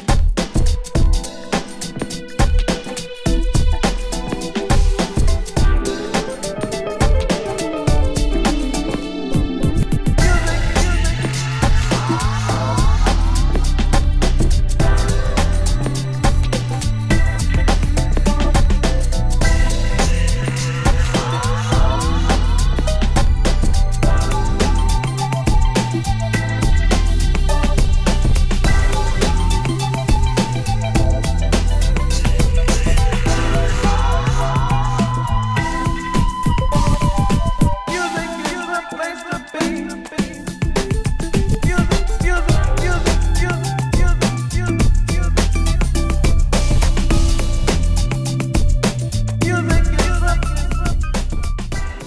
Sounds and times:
Music: 0.0 - 52.0.

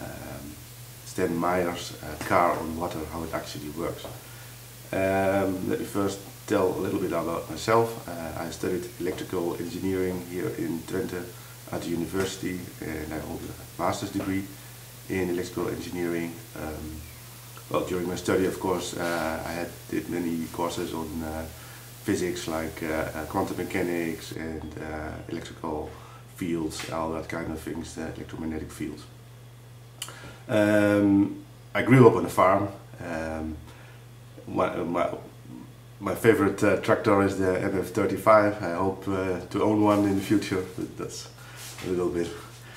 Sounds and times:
Speech: 0.0 - 4.2, 4.9 - 17.0, 17.6 - 29.2, 30.5 - 33.6, 34.4 - 42.5.

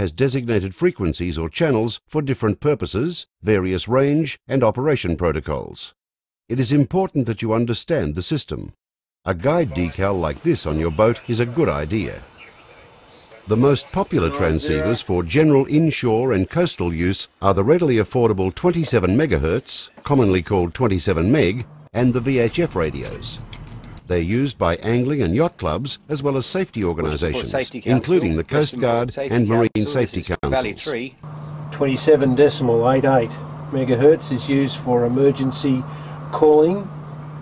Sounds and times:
Speech: 0.0 - 12.3, 13.4 - 23.4, 24.1 - 36.9.

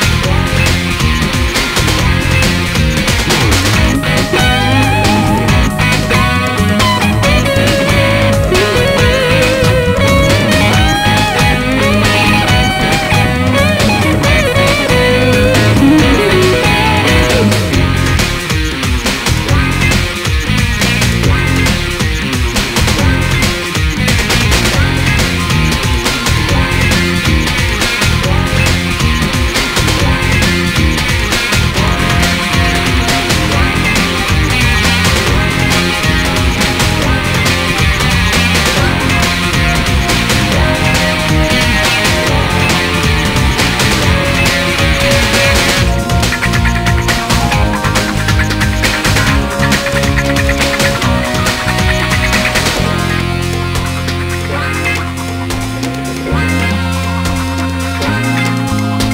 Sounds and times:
Sampler: 0.0 - 59.1.

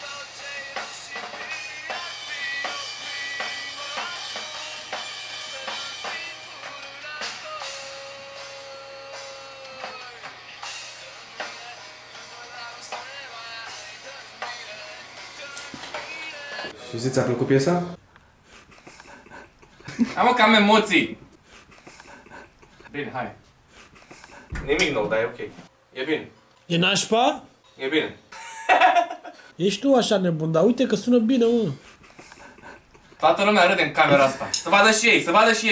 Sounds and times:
Inside, small room: 0.0 - 35.7.

